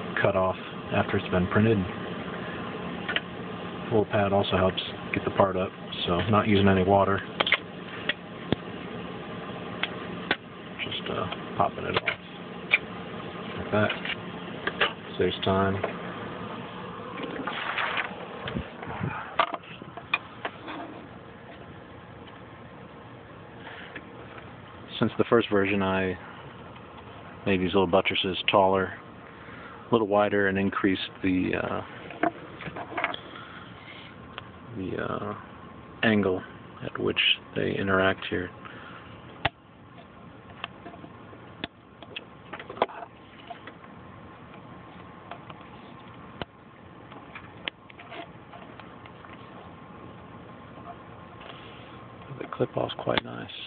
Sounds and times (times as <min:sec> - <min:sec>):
Speech: 0:00.1 - 0:02.0, 0:03.9 - 0:07.3, 0:10.8 - 0:12.2, 0:13.6 - 0:14.0, 0:15.1 - 0:15.9, 0:24.9 - 0:26.2, 0:27.4 - 0:29.0, 0:29.9 - 0:31.9, 0:34.7 - 0:38.6, 0:52.3 - 0:53.6.